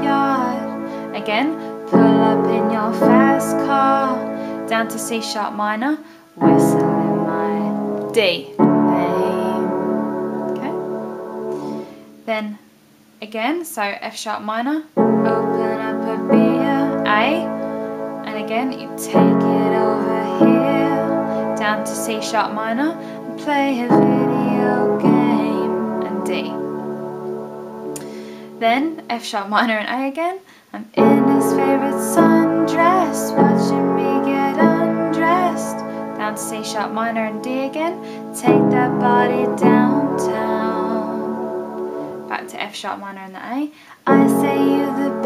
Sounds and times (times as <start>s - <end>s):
Piano: 0.0s - 12.3s, 14.9s - 29.3s, 31.0s - 42.8s, 44.0s - 45.2s
Inside, small room: 0.0s - 45.2s
Speech: 1.1s - 9.7s, 10.6s - 10.8s, 12.3s - 12.6s, 13.2s - 17.5s, 18.3s - 20.4s, 21.6s - 26.6s, 28.6s - 31.9s, 42.3s - 45.2s.